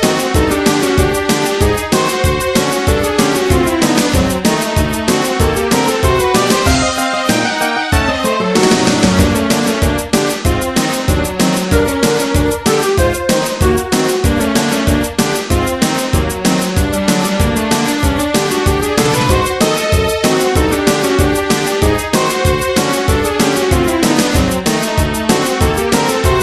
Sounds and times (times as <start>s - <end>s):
Soundtrack music: 17.3s - 21.7s.